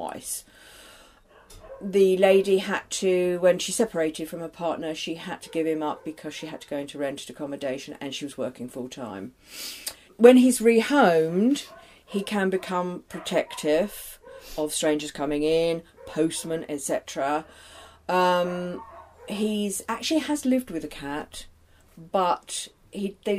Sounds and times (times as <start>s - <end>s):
Speech: 0.0s - 0.5s, 1.8s - 9.3s, 10.2s - 17.5s, 18.1s - 23.3s
Bow-wow: 1.3s - 1.9s, 11.6s - 14.6s, 18.8s - 19.4s.